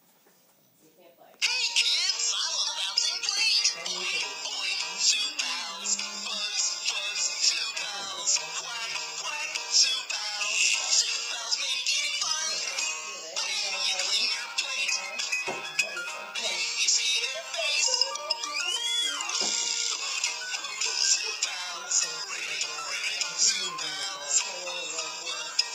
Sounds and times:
Inside, small room: 0.0s - 25.7s
Music: 1.4s - 25.7s
Speech: 3.6s - 6.5s, 12.4s - 14.5s, 21.4s - 25.6s.

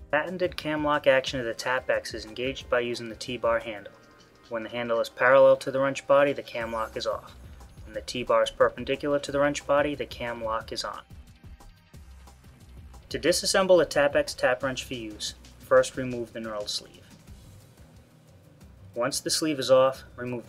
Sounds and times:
Music: 0.0s - 20.4s
Speech: 0.1s - 3.9s, 4.5s - 7.3s, 7.9s - 11.0s, 13.1s - 17.0s, 19.0s - 20.4s.

